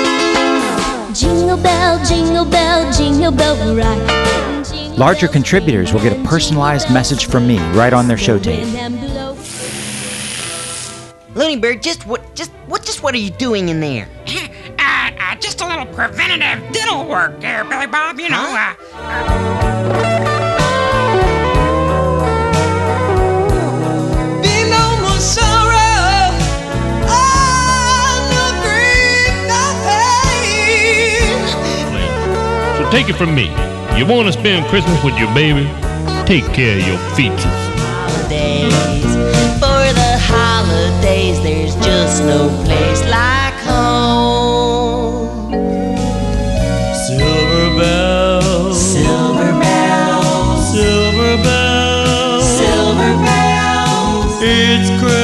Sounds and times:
Music: 0.0s - 55.2s
Speech: 5.0s - 8.8s, 32.8s - 39.1s.

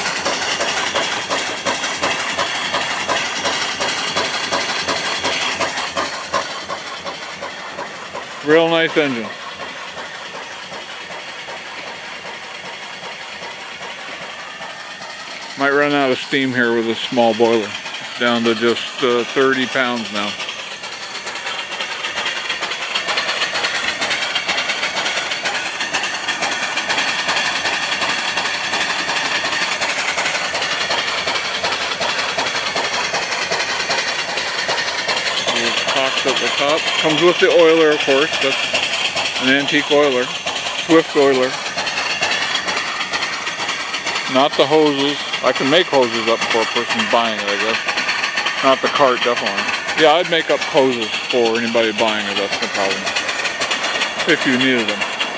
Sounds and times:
Engine: 0.0s - 55.3s
Outside, rural or natural: 0.0s - 55.3s
Speech: 8.4s - 9.4s, 15.6s - 20.4s, 35.5s - 38.6s, 39.4s - 41.6s, 44.3s - 47.8s, 48.6s - 53.1s, 54.2s - 55.0s.

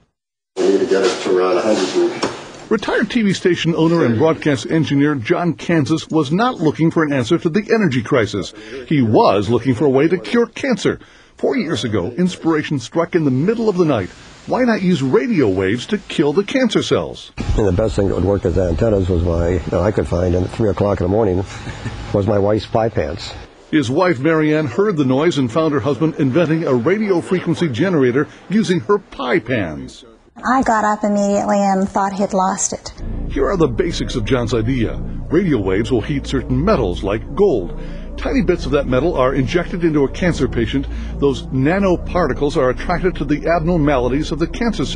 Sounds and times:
Speech: 0.6s - 44.9s.

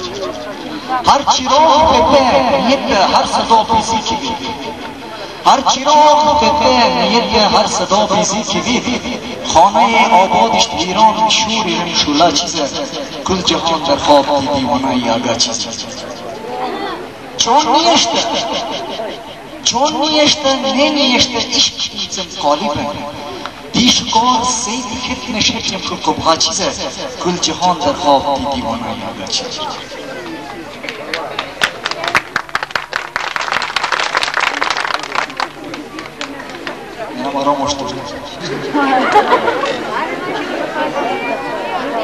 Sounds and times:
Speech: 0.0s - 32.3s, 35.0s - 42.0s.

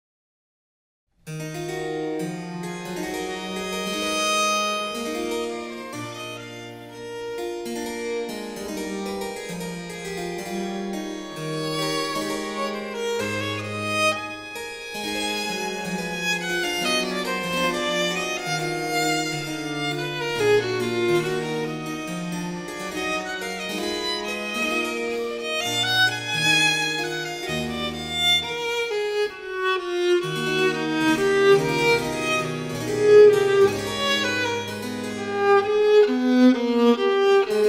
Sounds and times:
Piano: 1.2s - 37.6s
Cello: 1.3s - 37.6s
Orchestra: 1.6s - 37.6s
Violin, fiddle: 3.0s - 8.9s, 10.5s - 37.6s.

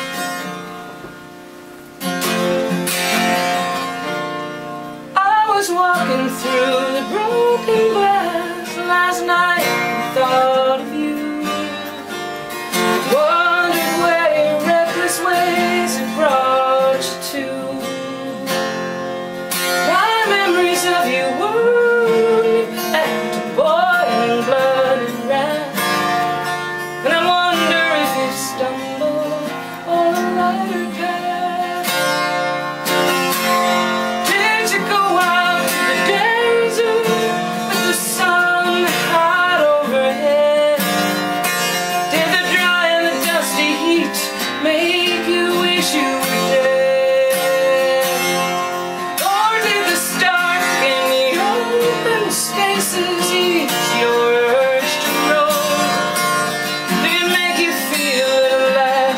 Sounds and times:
Music: 0.0s - 59.1s.

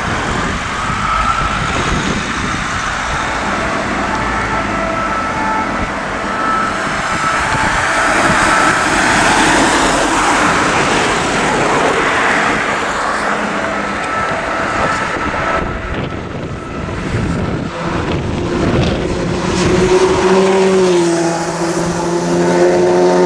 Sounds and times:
Ambulance (siren): 0.0s - 23.2s.

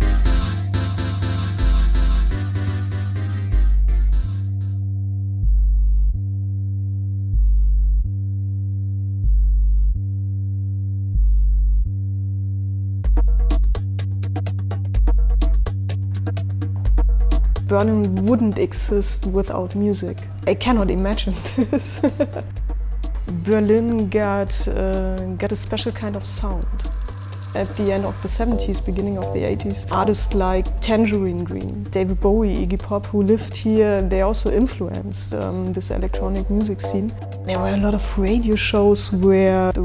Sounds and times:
Music: 0.0s - 39.8s
Speech: 17.7s - 22.2s, 23.3s - 26.7s, 27.6s - 39.8s.

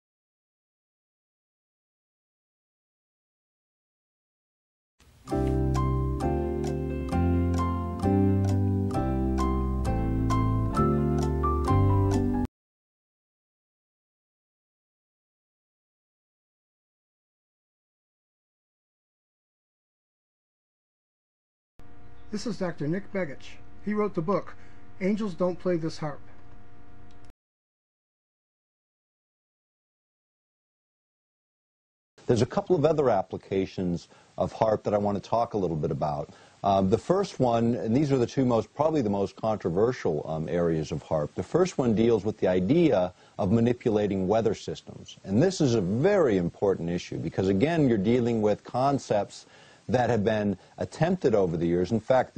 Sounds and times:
Speech: 22.3s - 26.3s, 32.2s - 52.3s.

